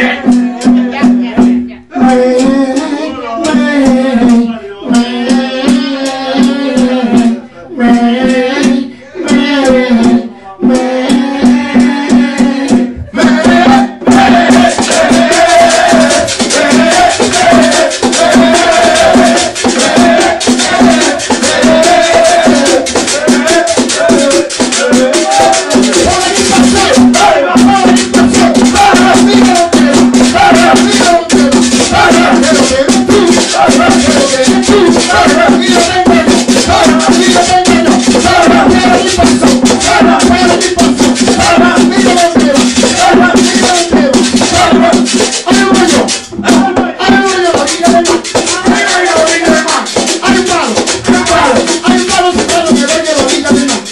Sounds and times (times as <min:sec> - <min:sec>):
Speech: 0:00.0 - 0:05.0
Music: 0:00.0 - 0:53.9.